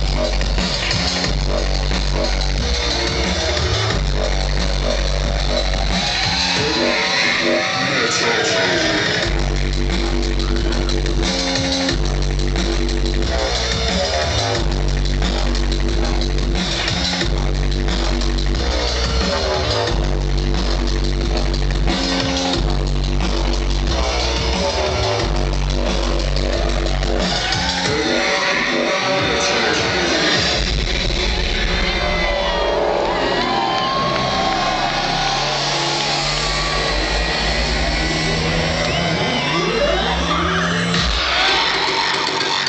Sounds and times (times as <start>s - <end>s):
Heavy metal: 0.0s - 42.6s.